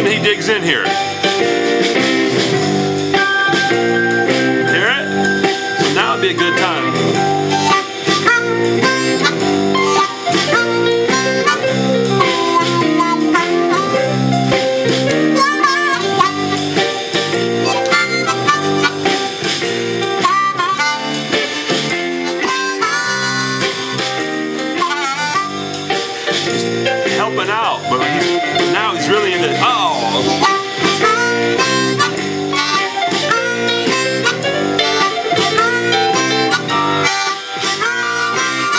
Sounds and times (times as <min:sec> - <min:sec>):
Blues: 0:00.0 - 0:38.7
Harmonica: 0:02.6 - 0:26.8, 0:27.8 - 0:38.7.